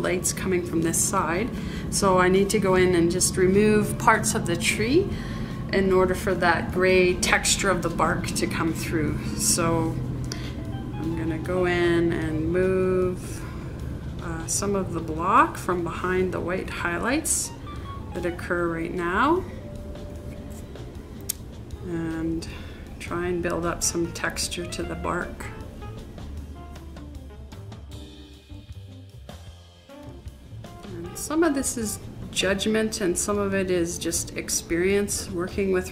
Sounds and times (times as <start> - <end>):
Speech: 0.0 - 5.1, 5.7 - 10.0, 11.1 - 13.4, 14.2 - 17.5, 18.2 - 19.5, 21.8 - 25.5, 30.9 - 35.9.